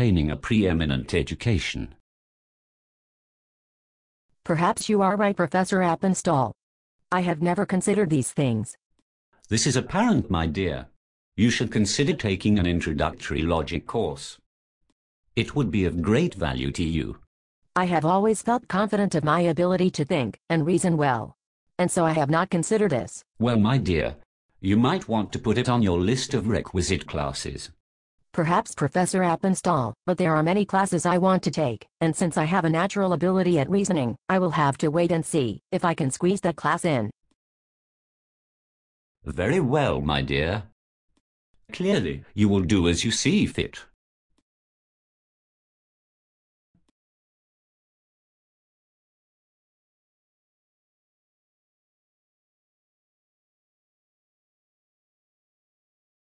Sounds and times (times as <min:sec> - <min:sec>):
Speech: 0:00.0 - 0:02.0, 0:04.5 - 0:08.8, 0:09.5 - 0:14.4, 0:15.4 - 0:17.2, 0:17.8 - 0:27.8, 0:28.4 - 0:37.1, 0:39.3 - 0:40.7, 0:41.7 - 0:43.9.